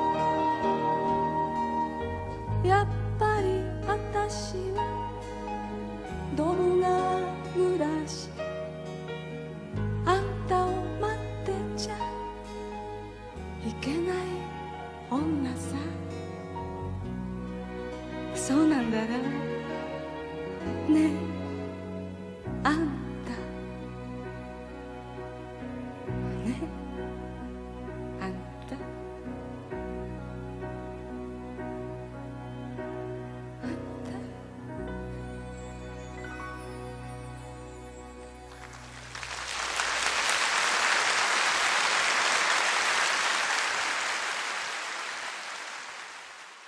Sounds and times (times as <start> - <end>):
Music: 0.0 - 44.6.